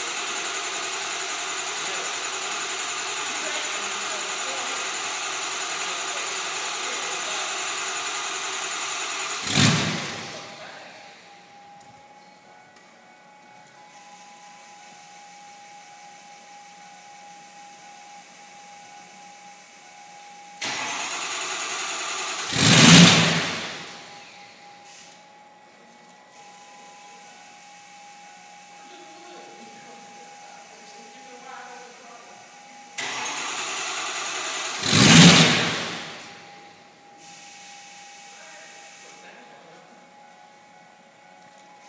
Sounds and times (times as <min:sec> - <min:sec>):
Vehicle: 0:00.0 - 0:41.8.